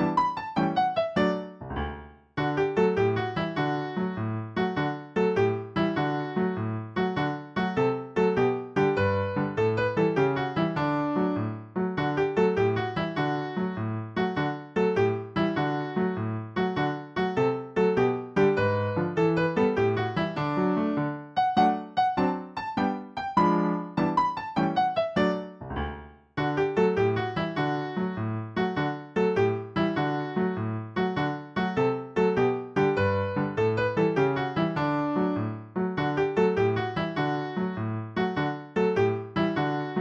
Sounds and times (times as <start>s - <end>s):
Music: 0.0s - 40.0s.